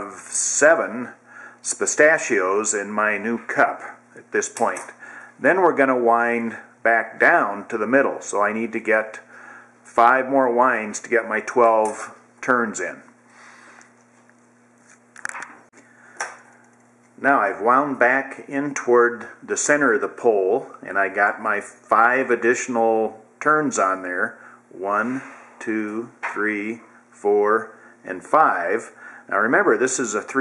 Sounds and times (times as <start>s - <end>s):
Speech: 0.0s - 9.3s, 9.9s - 13.1s, 17.2s - 30.4s.